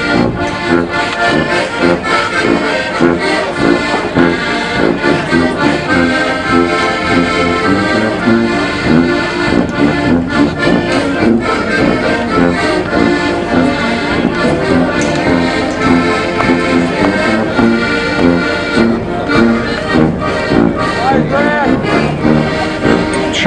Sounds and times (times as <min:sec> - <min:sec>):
Music: 0:00.0 - 0:23.4
Speech: 0:21.0 - 0:21.8, 0:23.2 - 0:23.4.